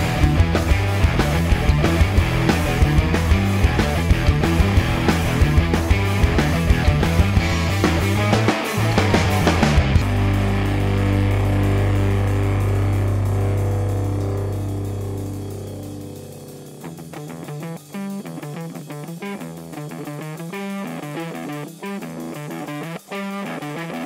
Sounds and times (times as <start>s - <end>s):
Music: 0.0s - 24.0s.